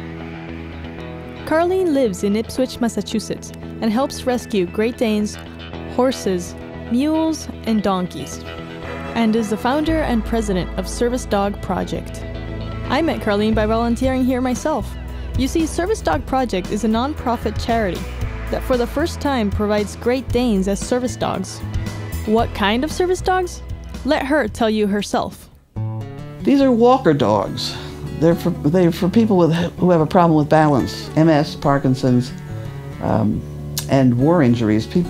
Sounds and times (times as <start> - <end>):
Music: 0.0 - 35.0
Speech: 1.5 - 8.4, 9.2 - 12.2, 12.9 - 21.6, 22.3 - 25.5, 26.4 - 32.4, 33.0 - 35.0.